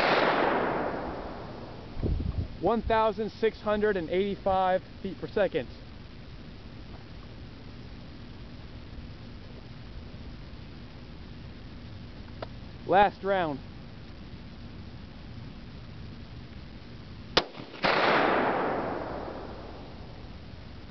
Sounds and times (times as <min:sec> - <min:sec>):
Outside, rural or natural: 0:00.0 - 0:20.9
Speech: 0:02.6 - 0:05.8, 0:12.8 - 0:13.6.